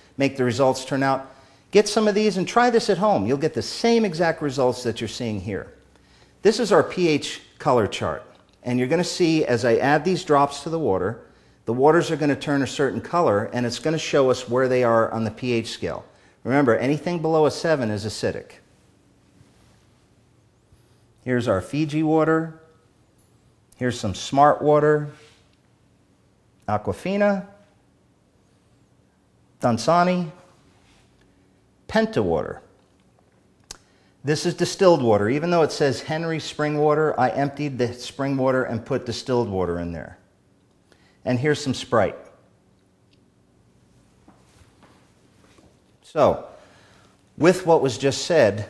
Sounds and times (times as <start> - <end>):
Speech: 0.2 - 5.8, 6.4 - 18.7, 21.2 - 22.7, 23.8 - 25.3, 26.6 - 27.6, 29.6 - 30.5, 31.9 - 32.8, 34.2 - 40.3, 41.2 - 42.4, 46.0 - 46.6, 47.4 - 48.7.